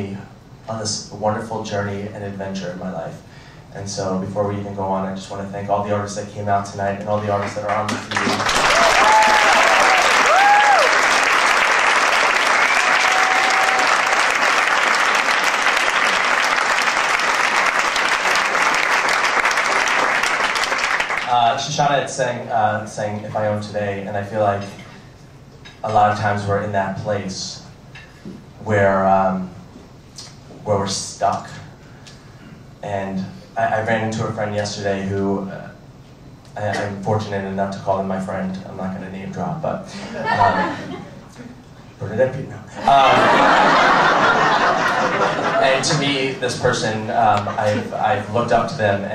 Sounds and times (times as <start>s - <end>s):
Applause: 7.5s - 21.3s.